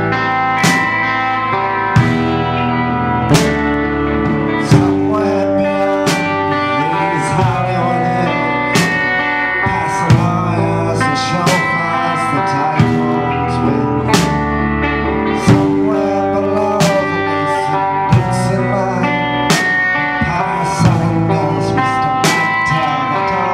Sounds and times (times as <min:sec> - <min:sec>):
Music: 0:00.0 - 0:23.5.